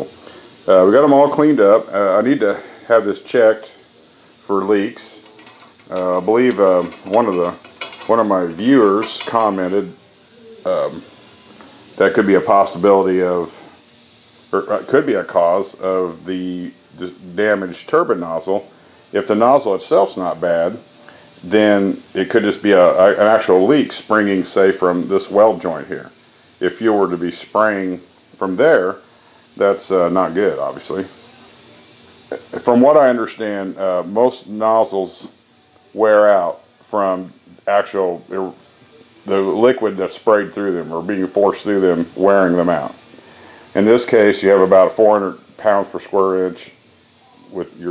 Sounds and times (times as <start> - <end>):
Speech: 0.0 - 3.9, 4.5 - 10.0, 10.6 - 11.1, 12.0 - 13.8, 14.5 - 20.8, 21.4 - 29.0, 29.6 - 31.5, 32.3 - 35.4, 36.0 - 38.6, 39.2 - 43.0, 43.8 - 47.9.